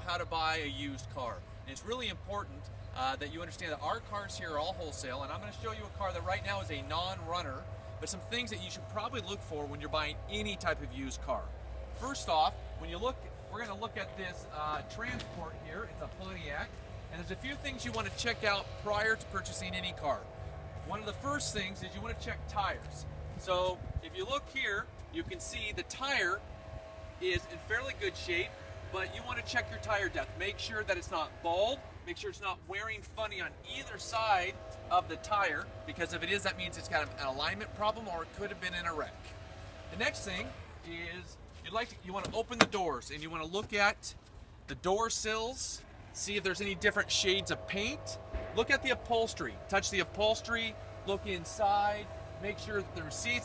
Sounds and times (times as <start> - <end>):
Speech: 0.0 - 26.4, 27.2 - 39.3, 39.9 - 53.4.